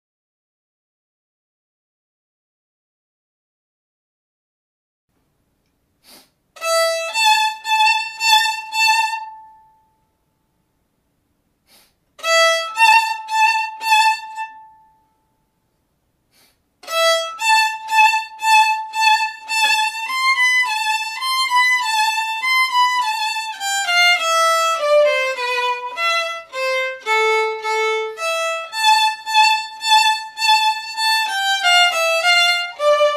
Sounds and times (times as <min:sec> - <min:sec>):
Violin, fiddle: 0:06.6 - 0:09.8, 0:12.2 - 0:15.0, 0:16.8 - 0:33.1.